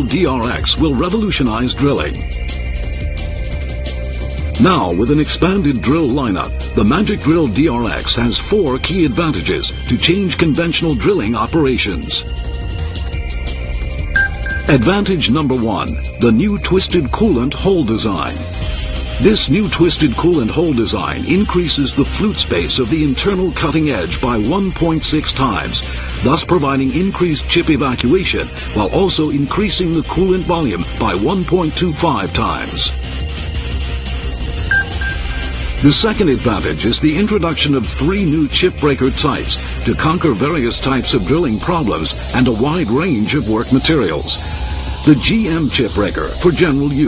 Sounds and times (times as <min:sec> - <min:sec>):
Speech: 0:00.0 - 0:02.2, 0:04.6 - 0:12.2, 0:14.7 - 0:18.5, 0:19.2 - 0:33.0, 0:35.8 - 0:44.4, 0:45.1 - 0:47.0
Music: 0:00.0 - 0:47.0.